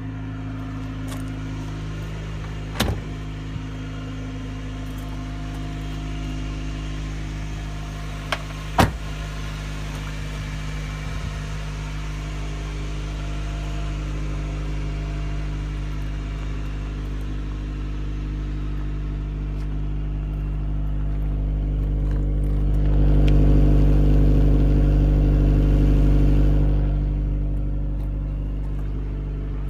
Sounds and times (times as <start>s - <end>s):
Car: 0.0s - 29.7s
Medium engine (mid frequency): 0.0s - 29.7s.